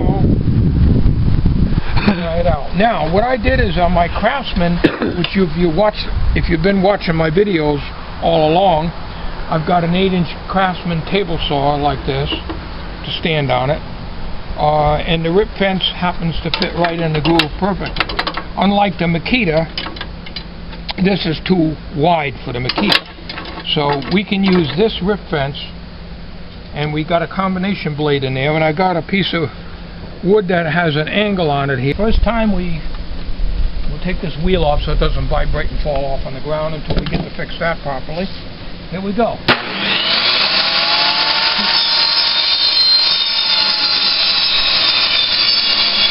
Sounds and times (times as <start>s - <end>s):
Speech: 0.0s - 0.3s, 2.0s - 12.4s, 13.0s - 13.8s, 14.6s - 18.0s, 18.6s - 19.8s, 20.9s - 23.0s, 23.6s - 25.8s, 26.7s - 29.6s, 30.2s - 32.9s, 33.9s - 39.5s.